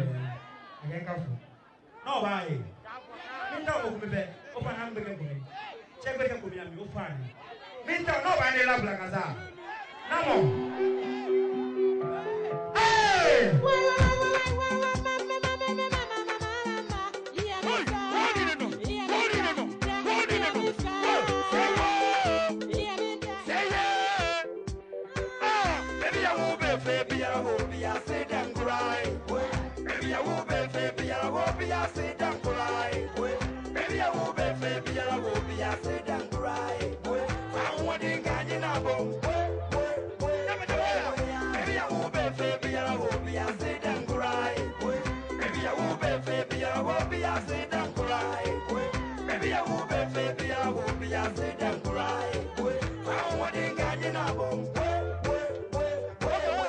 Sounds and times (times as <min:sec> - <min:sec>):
Traditional music: 0:10.0 - 0:56.6.